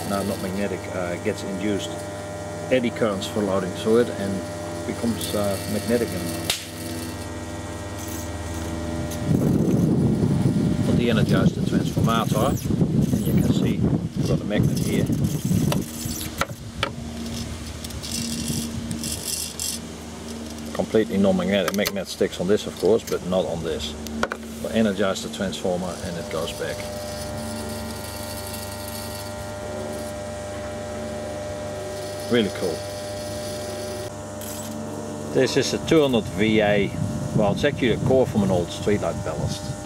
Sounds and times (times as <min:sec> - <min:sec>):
Speech: 0:00.0 - 0:02.0, 0:02.7 - 0:06.4, 0:10.9 - 0:12.6, 0:13.4 - 0:15.1, 0:20.7 - 0:24.0, 0:24.6 - 0:26.9, 0:32.2 - 0:32.8, 0:35.3 - 0:39.8
Outside, rural or natural: 0:00.0 - 0:39.8.